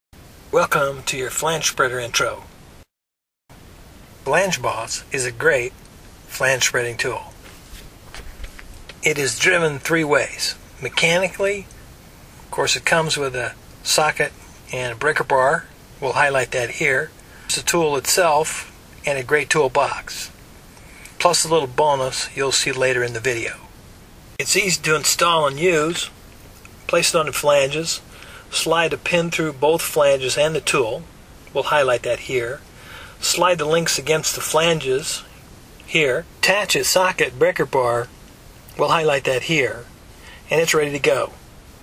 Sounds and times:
Speech: 0.5 - 2.5, 4.2 - 7.4, 9.0 - 11.7, 12.5 - 20.4, 21.2 - 23.7, 24.4 - 26.2, 26.8 - 32.6, 33.2 - 38.1, 38.7 - 41.4.

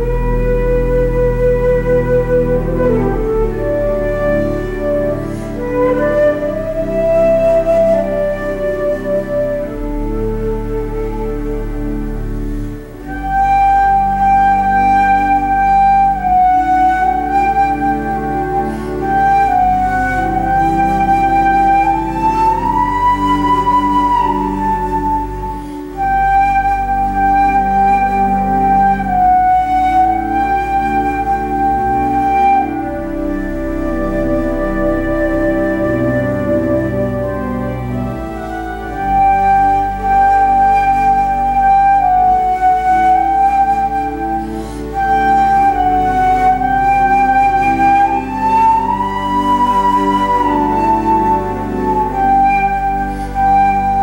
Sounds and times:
Flute: 0.0 - 54.0.

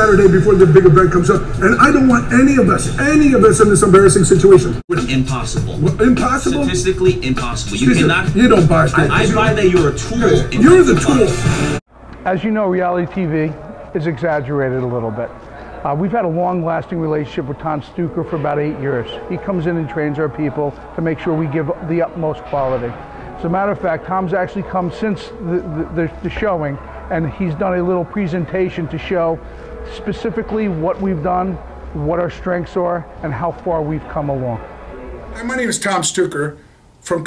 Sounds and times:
Speech: 0.0 - 11.4, 12.2 - 34.6, 35.4 - 37.2.

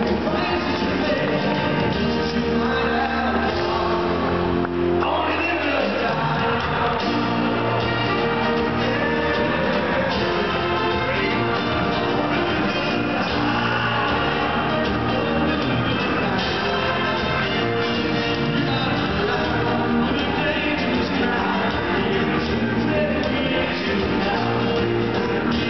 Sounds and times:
Male singing: 0.0 - 4.4, 5.0 - 25.7
Music: 0.0 - 25.7.

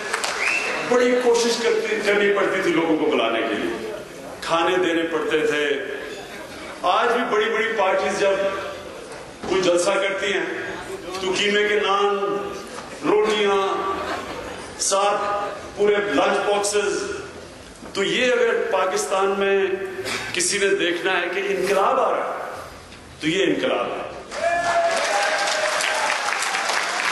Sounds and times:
Male speech, man speaking: 0.9 - 6.0, 6.8 - 8.8, 9.4 - 14.0, 14.8 - 17.3, 18.0 - 22.5, 23.2 - 24.2
Narration, monologue: 0.9 - 24.3.

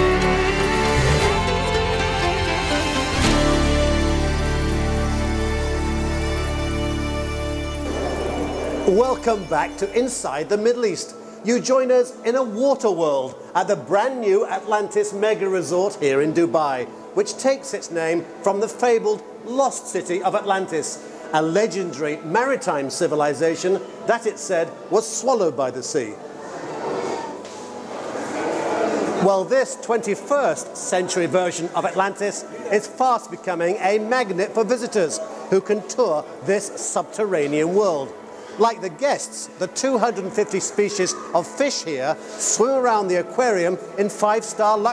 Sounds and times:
Speech: 8.9 - 26.2, 29.2 - 44.9.

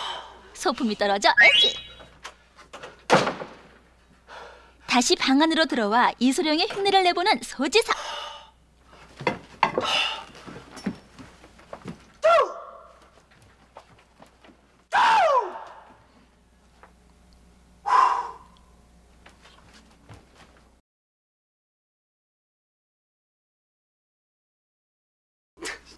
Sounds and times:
Speech: 0.6 - 1.4, 4.9 - 8.0.

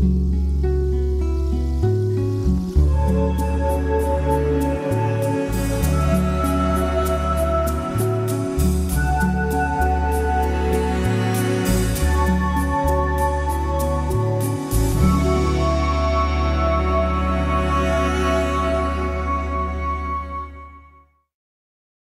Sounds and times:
Music: 0.0 - 21.4.

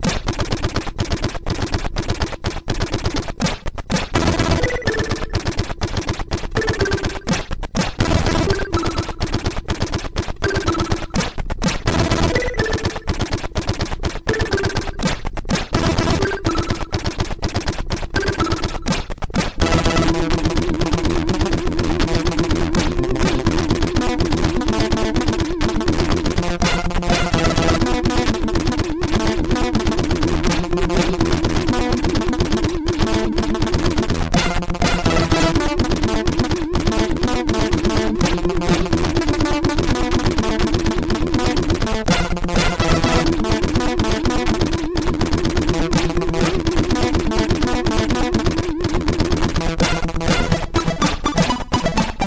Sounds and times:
Music: 0.0 - 52.2.

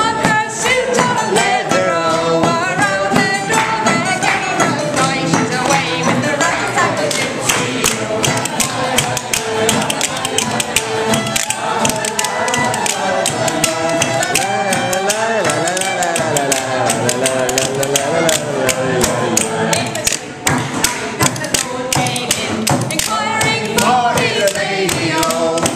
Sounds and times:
Musical instrument: 0.0 - 25.7
Singing: 0.0 - 25.7.

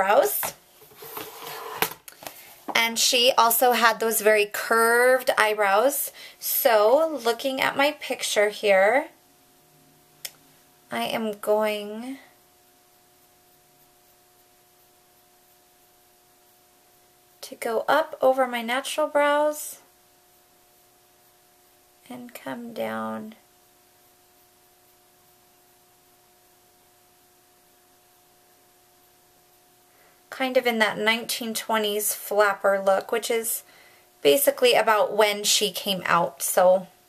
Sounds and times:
Speech: 0.0 - 0.6, 2.7 - 9.2, 10.9 - 12.3, 17.4 - 19.8, 22.0 - 23.4, 30.3 - 33.6, 34.2 - 37.0.

